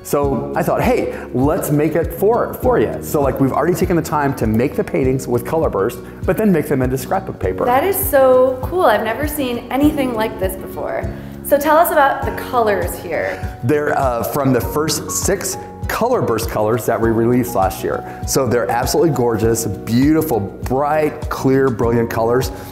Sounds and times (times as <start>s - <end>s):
Music: 0.0s - 22.7s
Speech: 0.1s - 22.5s.